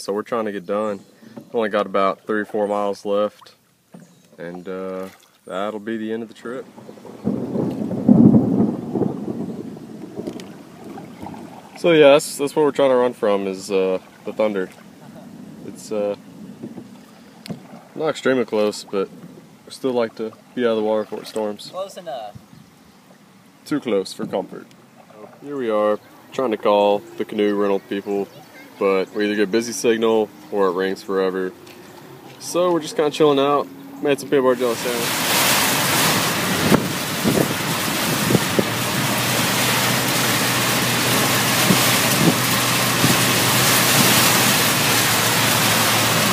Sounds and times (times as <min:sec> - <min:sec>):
Speech: 0:00.0 - 0:03.6, 0:04.4 - 0:06.6, 0:11.8 - 0:14.7, 0:15.7 - 0:16.2, 0:18.0 - 0:19.1, 0:19.7 - 0:22.4, 0:23.7 - 0:24.6, 0:25.2 - 0:31.5, 0:32.4 - 0:35.1
Rowboat, canoe, kayak: 0:00.0 - 0:46.3
Thunderstorm: 0:06.6 - 0:11.8, 0:35.0 - 0:46.3.